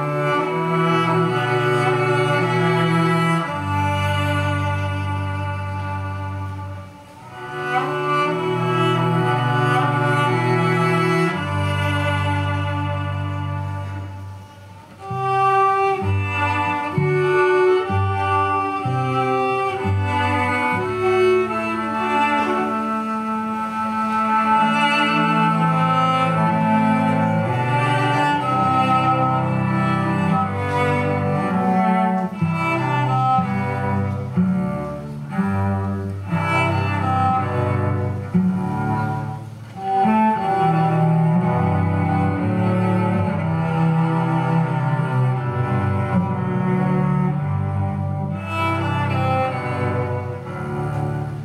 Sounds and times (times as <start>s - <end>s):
String section: 0.0s - 51.4s.